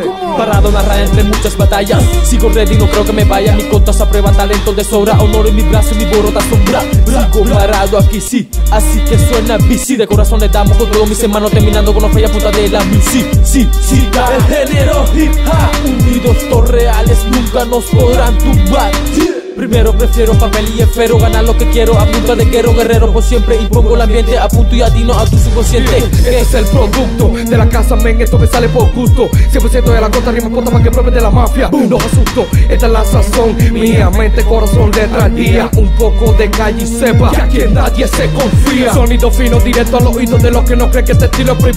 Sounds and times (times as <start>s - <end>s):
Pop music: 0.0s - 41.7s
Rhythm and blues: 0.1s - 41.7s.